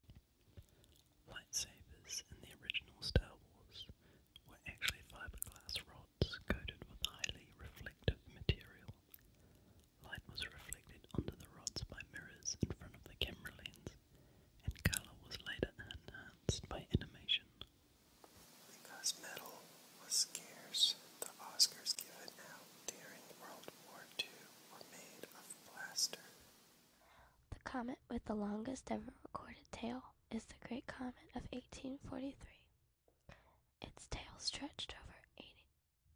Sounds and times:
Speech: 0:14.7 - 0:17.4, 0:27.5 - 0:32.5.

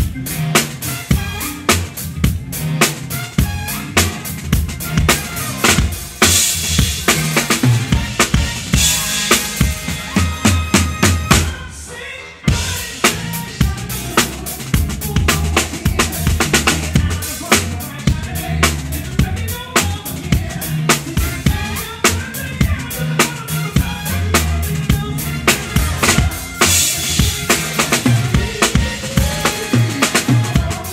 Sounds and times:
Bass drum: 0:00.0 - 0:11.6, 0:12.5 - 0:30.9
Drum roll: 0:00.0 - 0:11.7, 0:12.5 - 0:30.9
Drum kit: 0:00.0 - 0:30.9.

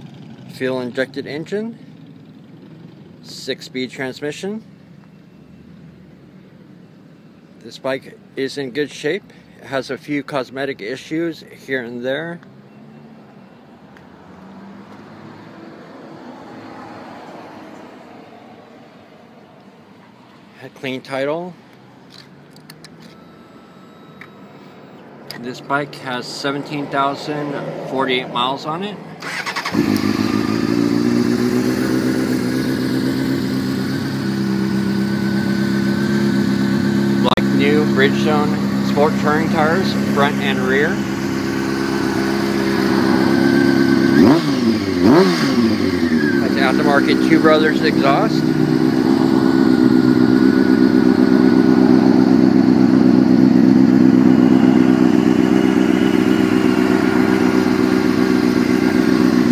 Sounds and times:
Speech: 0:00.5 - 0:01.8, 0:03.2 - 0:04.7, 0:07.6 - 0:12.4, 0:20.6 - 0:21.6, 0:25.3 - 0:29.0, 0:37.2 - 0:41.0, 0:46.4 - 0:48.4.

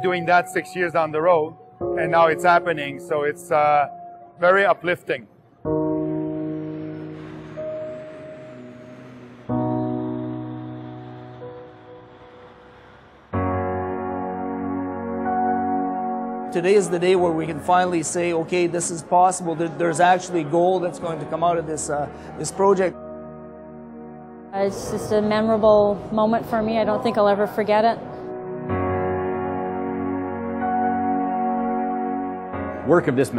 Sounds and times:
Music: 0:00.0 - 0:33.3.

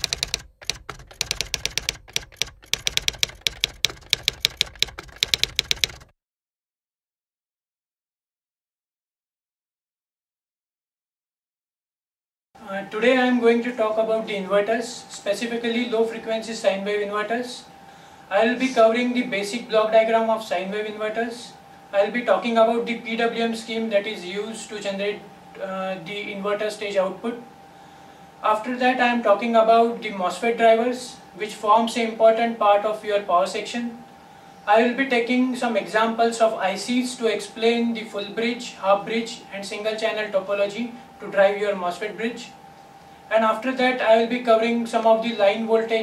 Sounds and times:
Speech: 0:12.6 - 0:17.7, 0:18.3 - 0:27.5, 0:28.4 - 0:34.0, 0:34.7 - 0:42.6, 0:43.3 - 0:46.0.

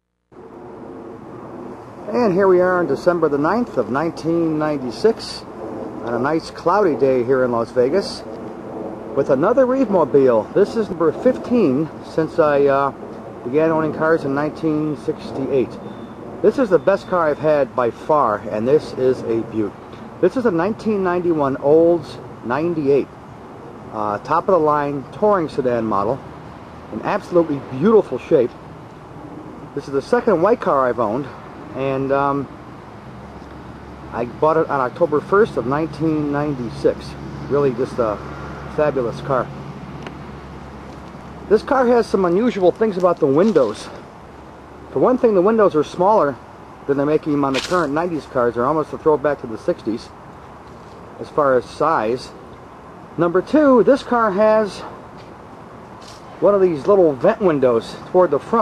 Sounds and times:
Speech: 0:02.1 - 0:08.3, 0:09.2 - 0:15.8, 0:16.4 - 0:23.1, 0:23.9 - 0:26.2, 0:26.9 - 0:28.6, 0:29.8 - 0:32.5, 0:34.1 - 0:39.5, 0:41.5 - 0:44.0, 0:44.9 - 0:50.2, 0:51.2 - 0:52.4, 0:53.2 - 0:55.0, 0:56.4 - 0:58.6.

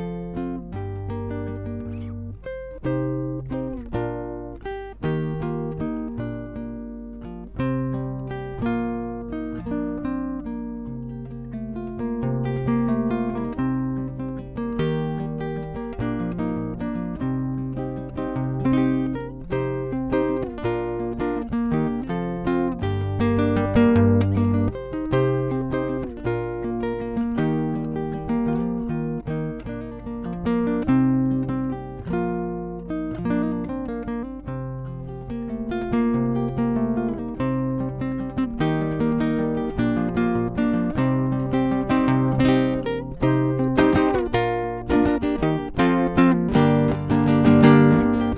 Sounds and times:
Guitar: 0:00.0 - 0:48.3.

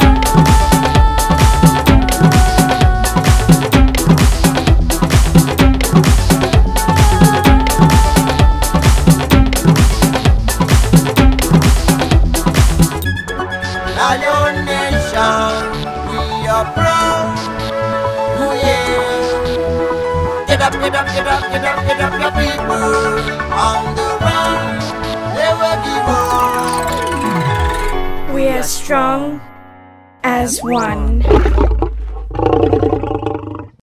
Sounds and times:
Music: 0:00.0 - 0:31.8
Speech: 0:28.3 - 0:29.4, 0:30.2 - 0:31.3.

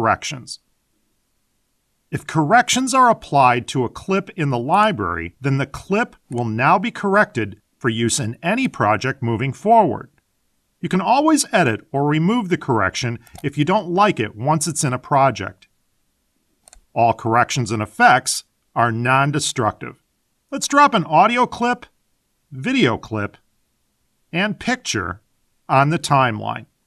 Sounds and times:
Speech: 0:00.0 - 0:00.6, 0:02.2 - 0:10.2, 0:10.8 - 0:15.7, 0:17.0 - 0:21.9, 0:22.5 - 0:23.4, 0:24.4 - 0:26.7.

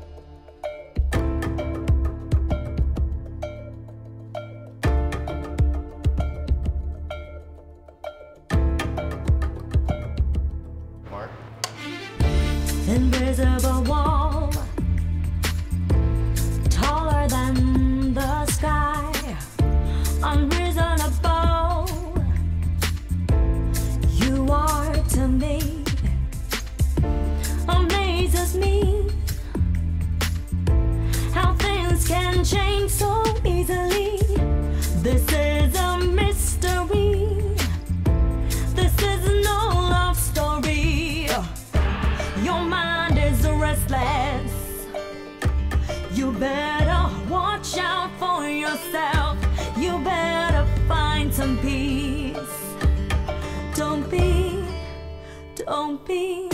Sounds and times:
Music: 0:00.0 - 0:56.5.

